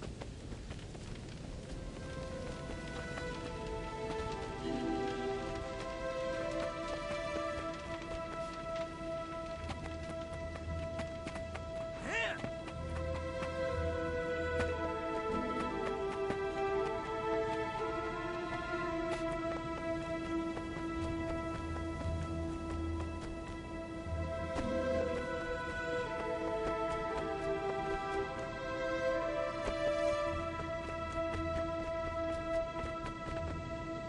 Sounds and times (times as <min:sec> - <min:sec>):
Music: 0:00.0 - 0:34.0
Run: 0:00.0 - 0:34.0.